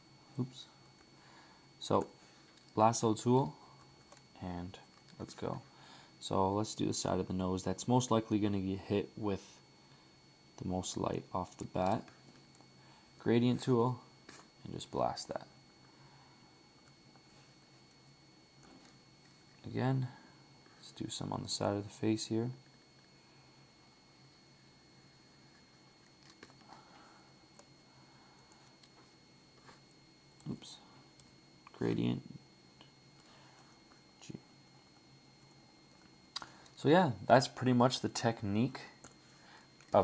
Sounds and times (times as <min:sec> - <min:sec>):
Inside, small room: 0:00.0 - 0:40.0
Speech: 0:00.4 - 0:00.8, 0:01.8 - 0:02.2, 0:02.8 - 0:03.6, 0:04.4 - 0:09.6, 0:10.6 - 0:12.1, 0:13.2 - 0:15.6, 0:19.6 - 0:20.2, 0:20.8 - 0:22.6, 0:30.4 - 0:30.9, 0:31.7 - 0:32.4, 0:36.8 - 0:39.0.